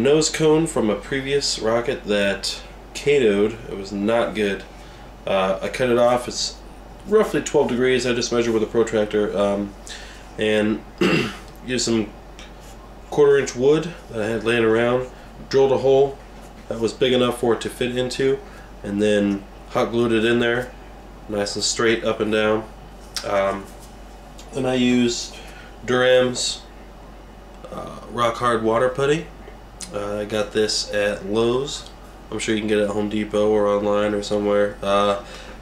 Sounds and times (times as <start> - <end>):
Speech: 0.0 - 9.8, 10.4 - 12.1, 13.1 - 20.7, 21.3 - 23.7, 24.4 - 26.7, 27.6 - 35.3.